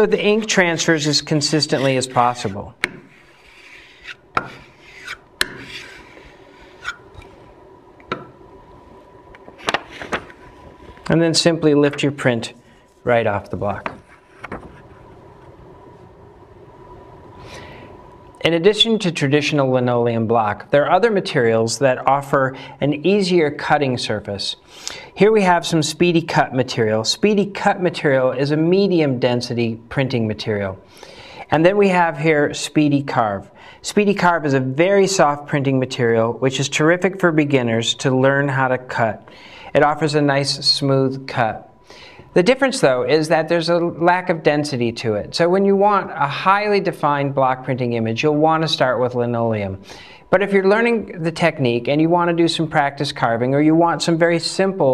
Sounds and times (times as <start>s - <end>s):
Speech: 0.0s - 2.8s, 11.1s - 14.0s, 18.4s - 24.6s, 25.2s - 30.8s, 31.5s - 41.7s, 42.4s - 54.9s
Inside, small room: 0.0s - 54.9s.